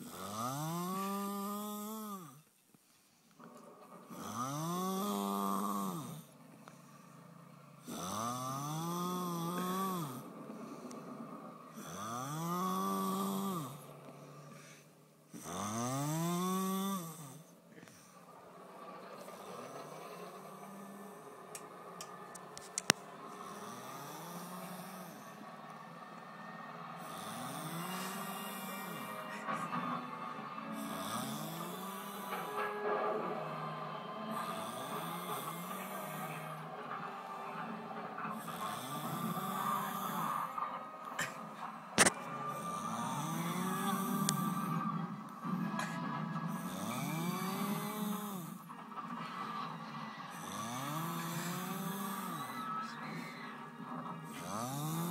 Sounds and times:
Snoring: 0.0 - 2.5, 3.4 - 18.4, 19.0 - 55.1
Music: 3.3 - 55.1.

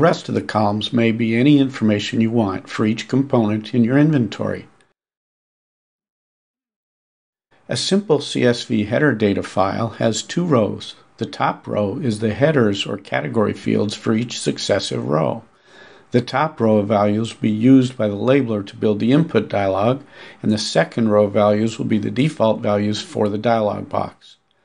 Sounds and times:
Speech: 0.0 - 4.8, 7.7 - 15.5, 16.1 - 24.4.

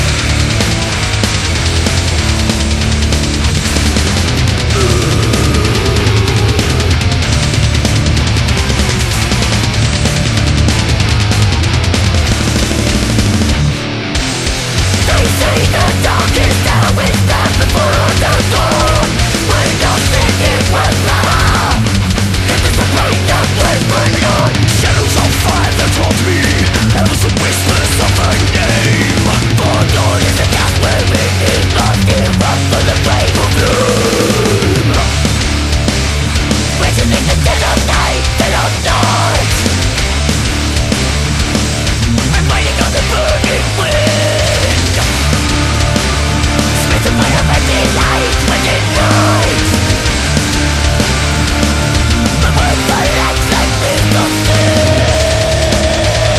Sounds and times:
Angry music: 0.0 - 56.3.

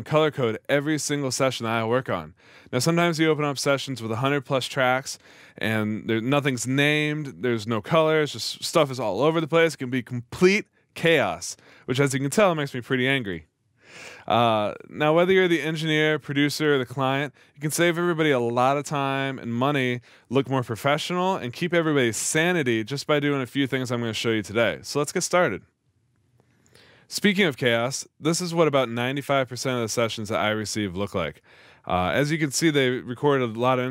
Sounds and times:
Speech: 0.0 - 13.4, 14.2 - 25.6, 27.1 - 33.9.

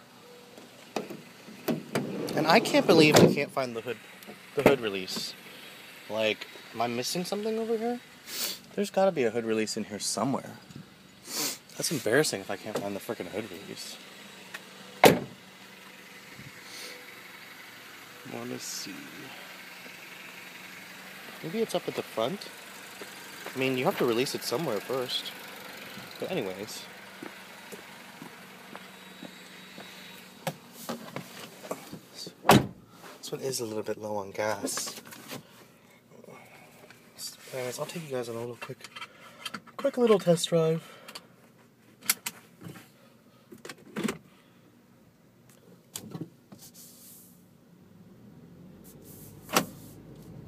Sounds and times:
Vehicle: 0.0 - 50.4
Idling: 2.4 - 9.4, 10.0 - 30.8.

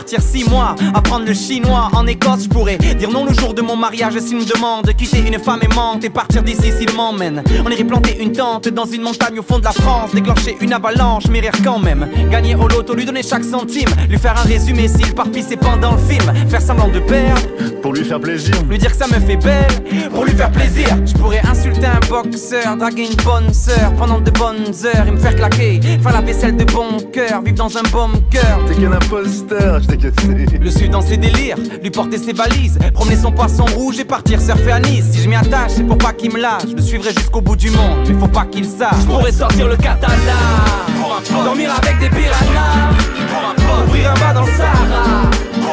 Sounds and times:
Music: 0.0 - 45.7.

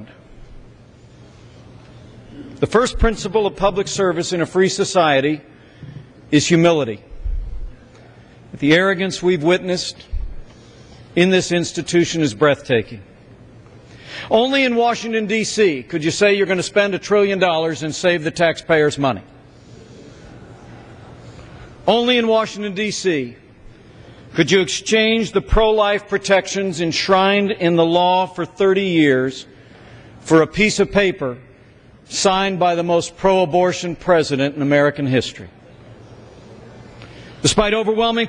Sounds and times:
Narration, monologue: 0.0 - 38.2
Male speech, man speaking: 2.6 - 5.4, 6.3 - 7.0, 8.6 - 10.0, 11.2 - 13.0, 14.3 - 19.3, 21.8 - 23.4, 24.4 - 29.5, 30.2 - 31.4, 32.1 - 35.5, 37.4 - 38.2.

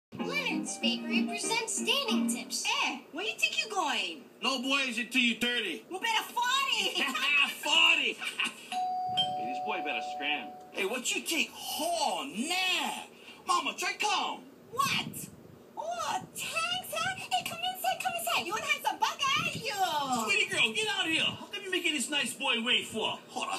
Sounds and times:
Music: 0.1 - 2.6
Inside, small room: 0.1 - 23.5.

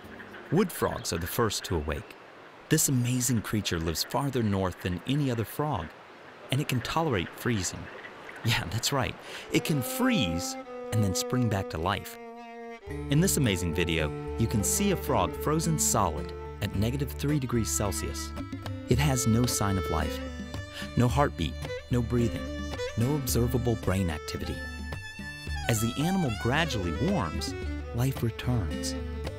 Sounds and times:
Speech: 0.5 - 5.9, 6.5 - 12.2, 13.1 - 18.3, 18.9 - 20.2, 20.8 - 24.6, 25.7 - 29.0
Music: 9.5 - 29.3.

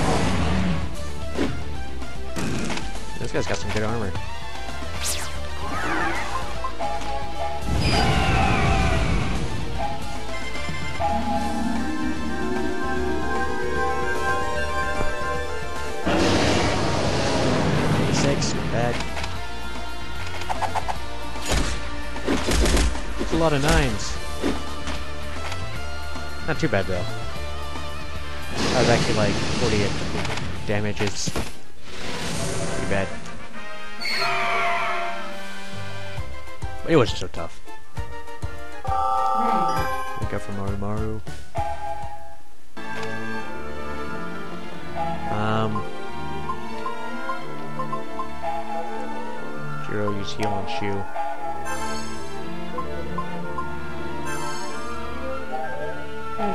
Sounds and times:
Music: 0.0 - 31.2, 31.8 - 56.5.

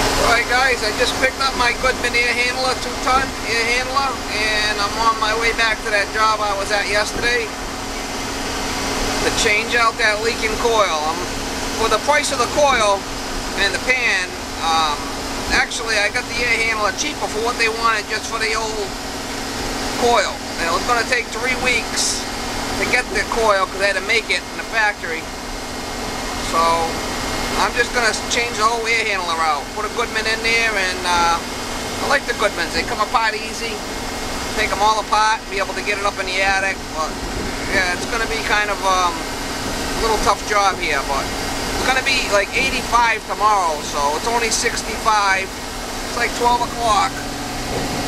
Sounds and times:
Air conditioning: 0.0 - 48.0
Vehicle: 0.0 - 48.0
Speech: 0.2 - 7.6, 9.2 - 19.0, 20.0 - 25.3, 26.4 - 27.0, 27.6 - 33.9, 34.5 - 39.3, 40.0 - 47.3.

